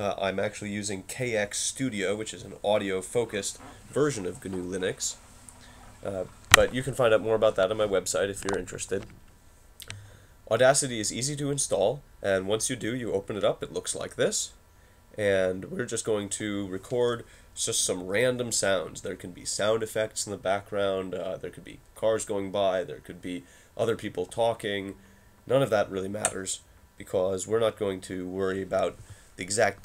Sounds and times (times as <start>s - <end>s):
Speech: 0.0s - 5.2s, 6.0s - 9.2s, 10.5s - 14.6s, 15.2s - 29.8s.